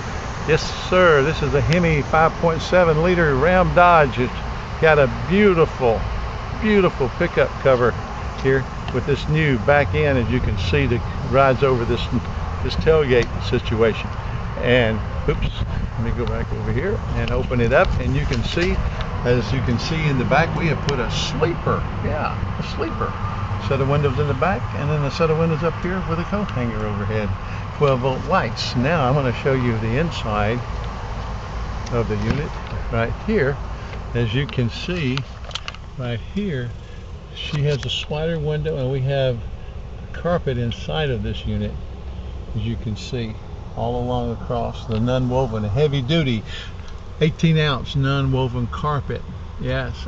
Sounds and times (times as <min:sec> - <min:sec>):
Speech: 0:00.5 - 0:30.7, 0:31.9 - 0:35.3, 0:36.0 - 0:36.8, 0:37.4 - 0:39.5, 0:40.1 - 0:41.8, 0:42.5 - 0:50.0.